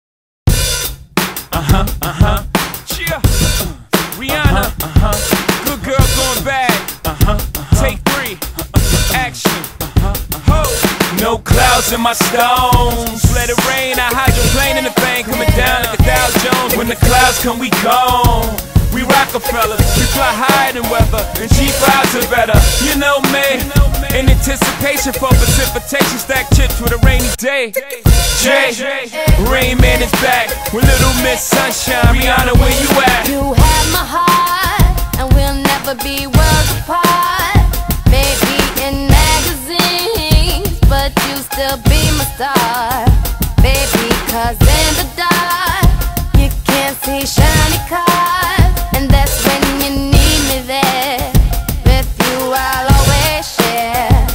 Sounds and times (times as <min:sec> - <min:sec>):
Bass drum: 0:00.5 - 0:28.6, 0:29.3 - 0:54.3.